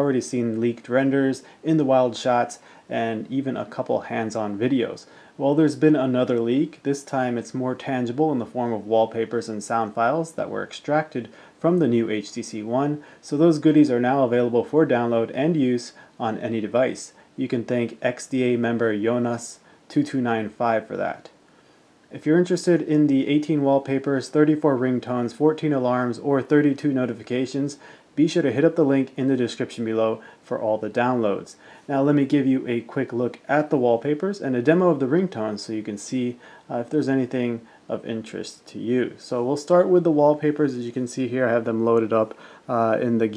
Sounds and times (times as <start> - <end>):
Speech: 0.0 - 21.4, 22.1 - 43.3.